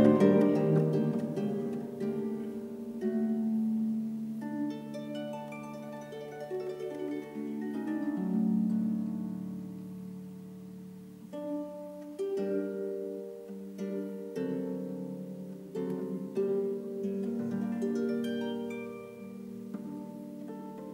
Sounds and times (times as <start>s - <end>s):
Harp: 0.0s - 20.9s
Pizzicato: 0.0s - 20.9s.